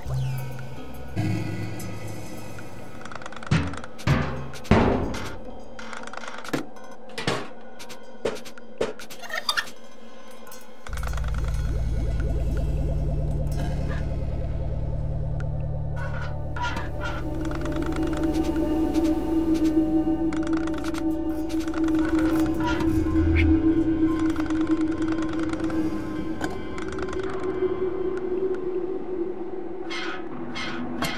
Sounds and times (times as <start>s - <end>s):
Music: 0.0s - 31.1s.